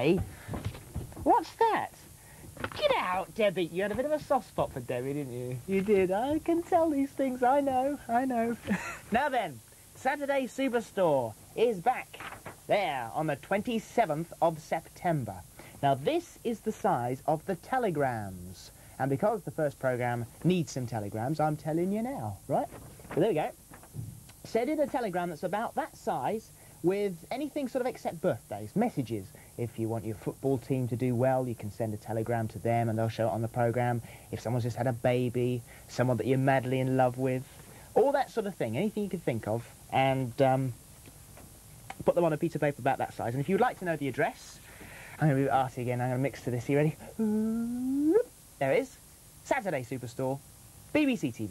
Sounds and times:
Speech: 0:00.0 - 0:00.3, 0:01.2 - 0:02.1, 0:02.7 - 0:23.6, 0:24.4 - 0:40.8, 0:41.9 - 0:44.6, 0:45.2 - 0:51.5.

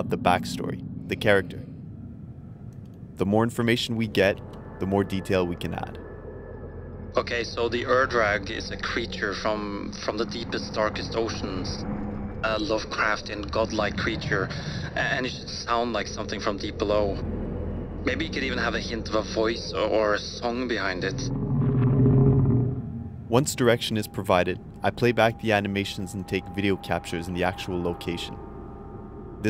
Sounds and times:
Speech: 0:00.0 - 0:01.6, 0:03.2 - 0:06.0, 0:07.2 - 0:11.8, 0:12.5 - 0:17.2, 0:18.1 - 0:21.3, 0:23.3 - 0:28.4.

